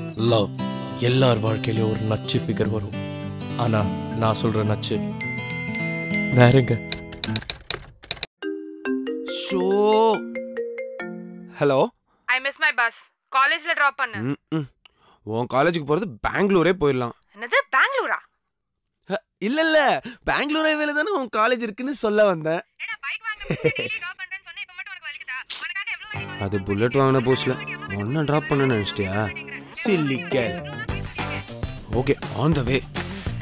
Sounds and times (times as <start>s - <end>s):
Music: 0.0s - 7.5s, 8.4s - 11.6s, 26.2s - 33.4s.